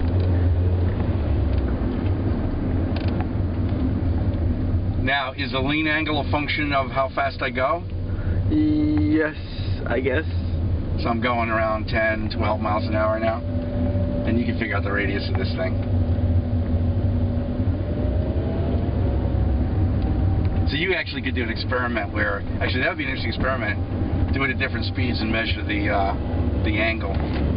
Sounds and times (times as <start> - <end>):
Car: 0.0 - 27.5
Speech: 5.0 - 7.9, 8.5 - 13.4, 14.3 - 15.8, 20.7 - 27.2.